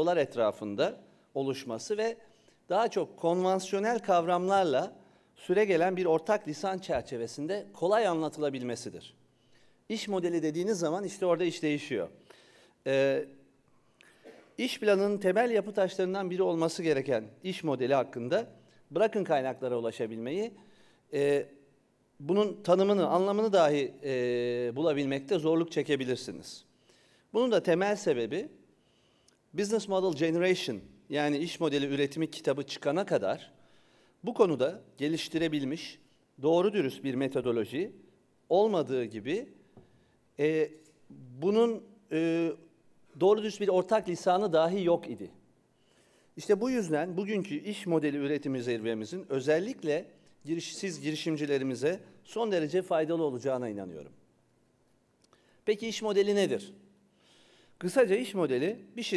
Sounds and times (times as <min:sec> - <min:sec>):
Speech: 0:00.0 - 0:09.2, 0:09.9 - 0:12.2, 0:12.9 - 0:13.3, 0:14.6 - 0:20.6, 0:21.2 - 0:21.5, 0:22.2 - 0:26.6, 0:27.4 - 0:28.5, 0:29.6 - 0:33.5, 0:34.2 - 0:39.5, 0:40.4 - 0:42.6, 0:43.2 - 0:45.4, 0:46.4 - 0:54.2, 0:55.7 - 0:56.8, 0:57.8 - 0:59.1.